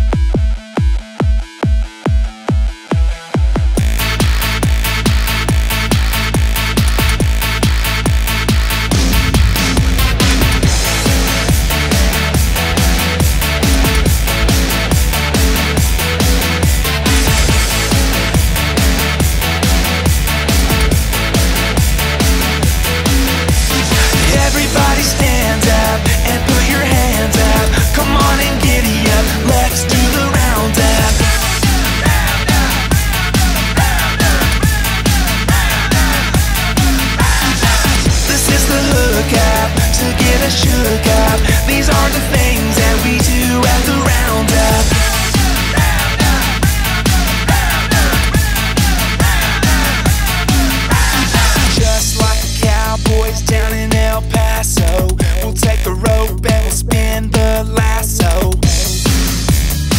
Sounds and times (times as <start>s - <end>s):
Pop music: 0.0s - 59.9s
Happy music: 2.6s - 59.9s.